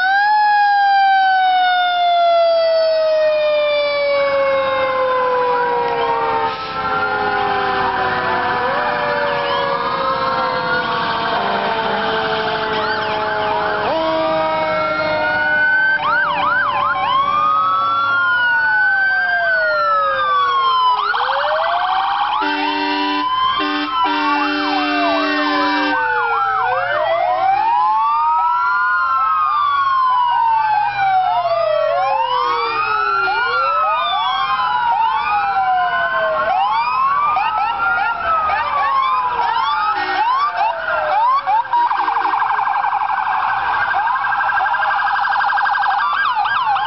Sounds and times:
Civil defense siren: 0:00.0 - 0:46.8
Fire engine, fire truck (siren): 0:00.0 - 0:46.8
Police car (siren): 0:00.0 - 0:46.8.

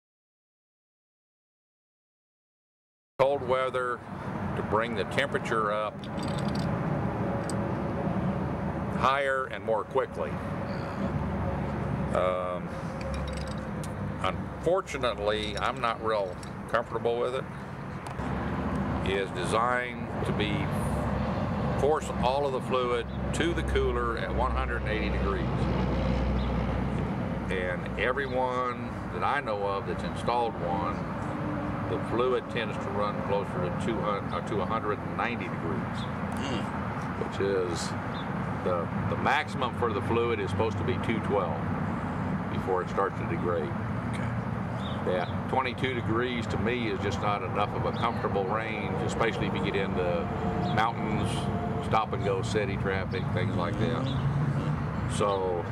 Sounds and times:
Speech: 0:03.2 - 0:04.0, 0:04.6 - 0:06.0, 0:09.0 - 0:10.9, 0:12.1 - 0:12.7, 0:14.2 - 0:17.4, 0:19.1 - 0:20.8, 0:21.8 - 0:25.5, 0:27.5 - 0:31.0, 0:31.9 - 0:38.0, 0:38.6 - 0:41.6, 0:42.5 - 0:43.8, 0:45.0 - 0:55.7.

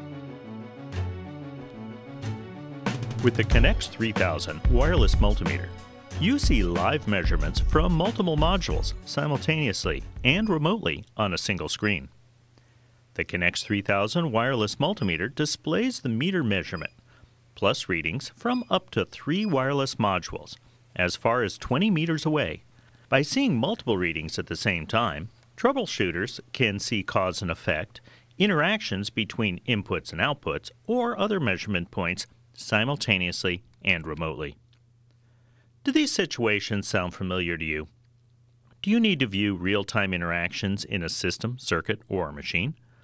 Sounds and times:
Speech: 0:03.2 - 0:12.2, 0:13.2 - 0:17.0, 0:17.6 - 0:34.6, 0:35.8 - 0:38.0, 0:38.8 - 0:42.8.

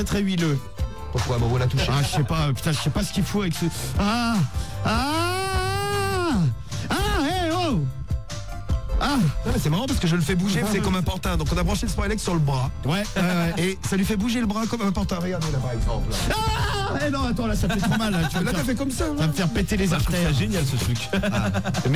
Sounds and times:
Speech: 0:00.0 - 0:03.8, 0:06.9 - 0:07.9, 0:09.5 - 0:21.2
Music: 0:00.0 - 0:21.9.

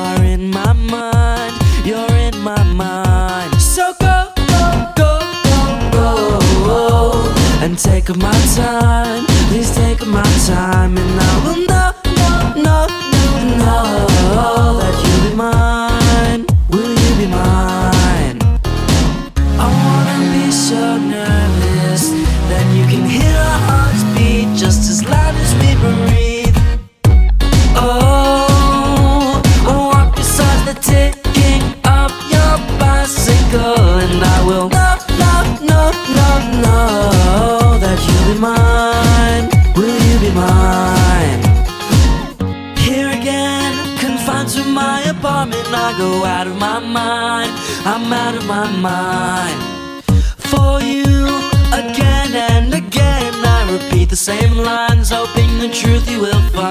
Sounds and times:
Music: 0:00.0 - 0:56.7.

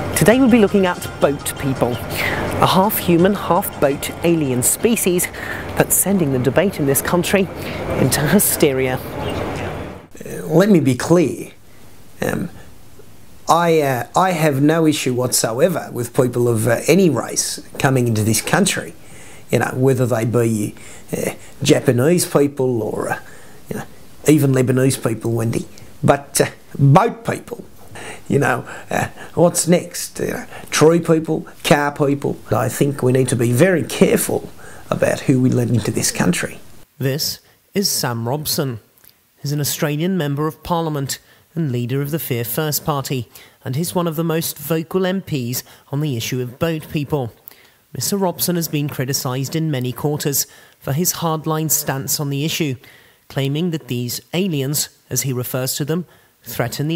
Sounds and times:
Speech: 0:00.2 - 0:11.6, 0:12.2 - 0:12.6, 0:13.5 - 0:27.7, 0:28.3 - 0:56.9.

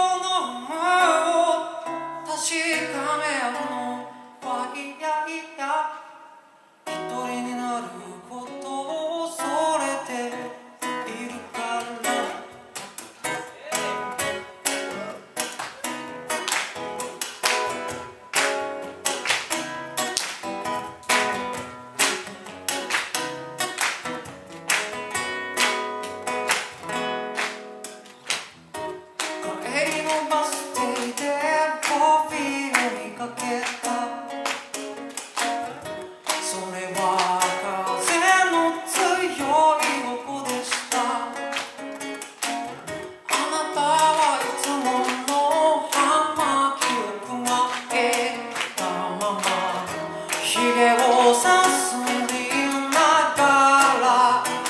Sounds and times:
Music: 0:00.0 - 0:06.0, 0:06.8 - 0:54.6.

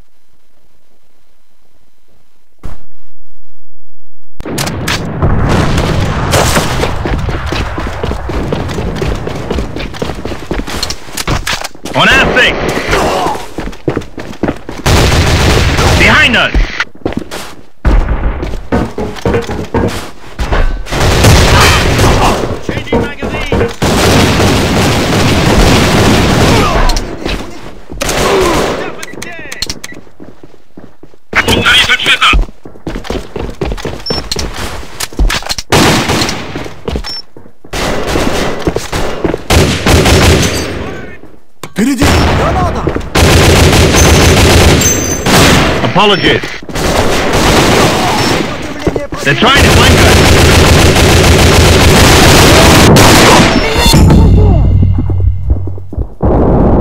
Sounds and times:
Speech: 0:11.9 - 0:13.5, 0:31.4 - 0:32.4, 0:41.8 - 0:43.0, 0:45.8 - 0:46.5, 0:48.0 - 0:50.1.

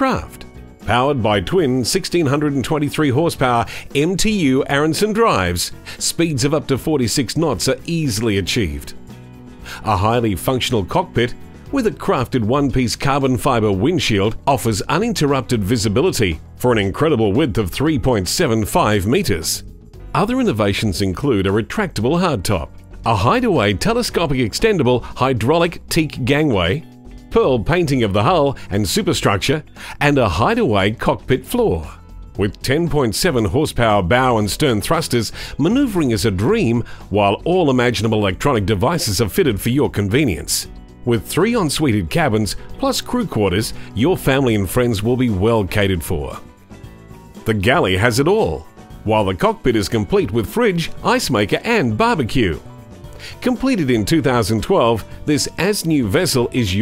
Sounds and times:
Speech: 0:00.0 - 0:09.0, 0:09.8 - 0:46.4, 0:47.4 - 0:52.6, 0:53.4 - 0:56.8
Music: 0:00.0 - 0:56.8.

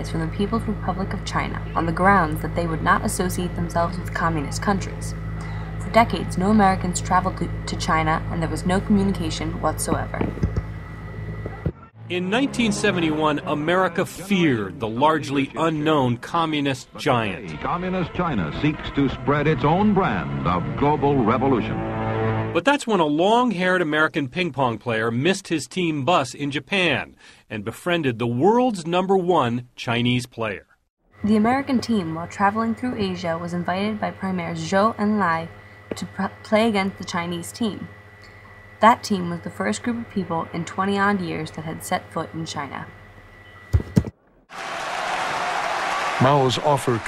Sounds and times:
Speech: 0:00.0 - 0:05.1, 0:05.8 - 0:10.3, 0:12.1 - 0:21.8, 0:22.6 - 0:30.6, 0:31.2 - 0:37.9, 0:38.8 - 0:42.9, 0:46.2 - 0:47.0
Music: 0:12.0 - 0:14.2, 0:17.3 - 0:22.6.

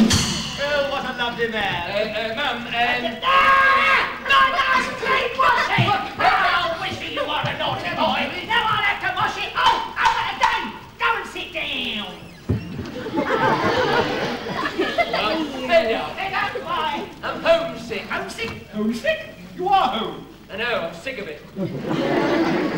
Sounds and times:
Speech: 0:00.6 - 0:12.3, 0:14.8 - 0:21.4
Chatter: 0:00.6 - 0:22.7.

